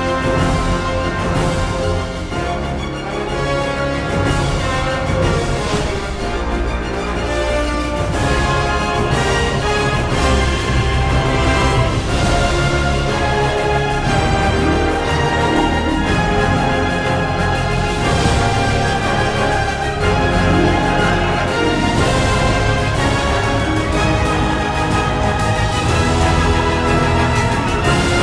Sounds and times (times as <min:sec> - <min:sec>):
Music: 0:00.0 - 0:28.2.